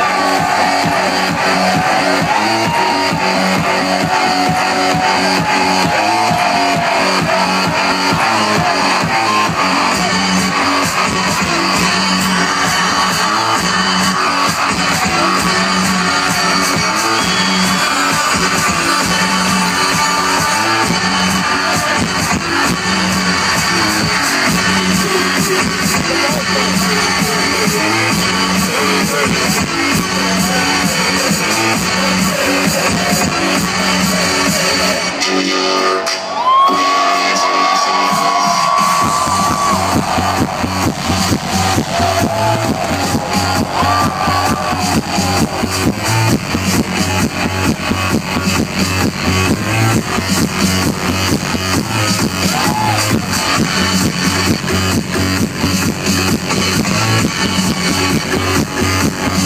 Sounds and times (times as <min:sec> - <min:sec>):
Music: 0:00.0 - 0:59.4.